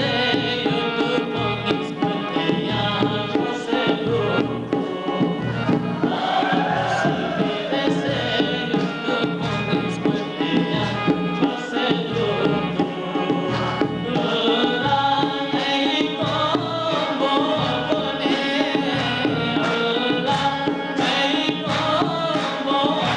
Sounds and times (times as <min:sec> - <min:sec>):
Traditional music: 0:00.0 - 0:23.1.